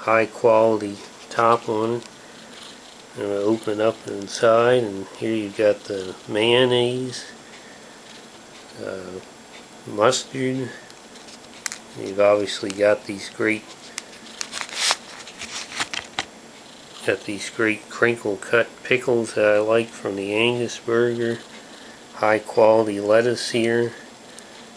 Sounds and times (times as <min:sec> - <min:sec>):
Speech: 0:00.0 - 0:02.1, 0:03.2 - 0:07.4, 0:08.7 - 0:10.8, 0:12.0 - 0:13.7, 0:17.0 - 0:21.5, 0:22.2 - 0:24.0.